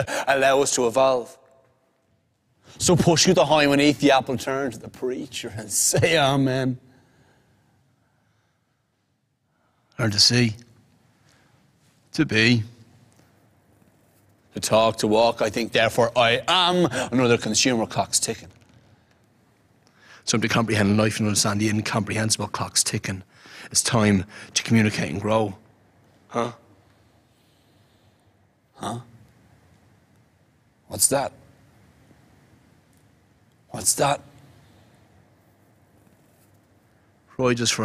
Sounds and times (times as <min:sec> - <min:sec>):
Speech: 0:00.0 - 0:01.4, 0:02.8 - 0:06.8, 0:10.0 - 0:10.7, 0:12.1 - 0:12.8, 0:14.6 - 0:18.5, 0:20.2 - 0:25.6, 0:26.3 - 0:26.6, 0:28.8 - 0:29.1, 0:30.9 - 0:31.4, 0:33.7 - 0:34.3, 0:37.3 - 0:37.8.